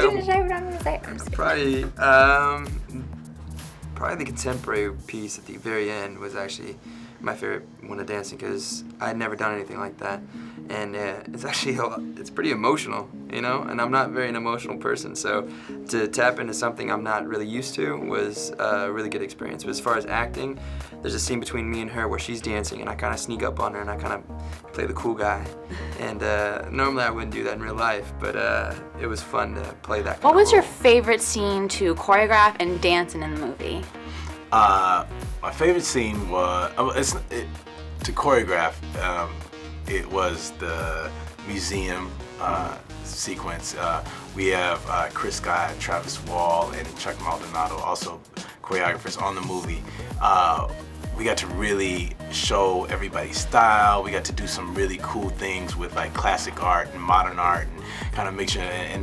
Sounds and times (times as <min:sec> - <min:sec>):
Speech: 0:00.0 - 0:03.1, 0:04.0 - 0:33.8, 0:34.5 - 0:59.0
Music: 0:00.0 - 0:59.0.